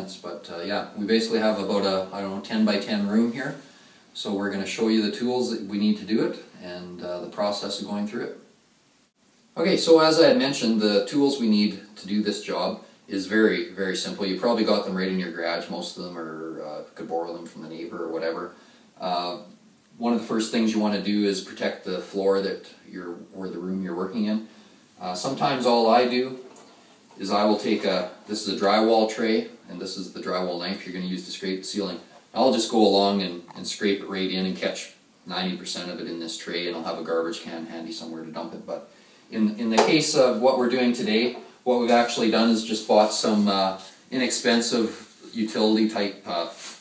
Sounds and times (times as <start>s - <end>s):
Speech: 0.0s - 8.5s, 9.5s - 46.8s.